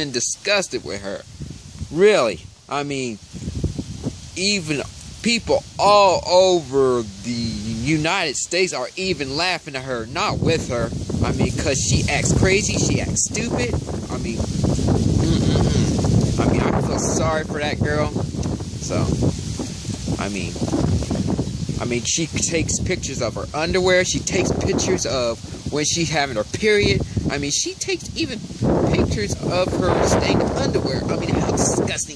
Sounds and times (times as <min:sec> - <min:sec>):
Speech: 0:00.0 - 0:01.2, 0:01.9 - 0:03.2, 0:04.4 - 0:14.4, 0:15.2 - 0:18.2, 0:18.8 - 0:19.2, 0:20.2 - 0:20.6, 0:21.8 - 0:32.1
Outside, rural or natural: 0:00.0 - 0:32.1.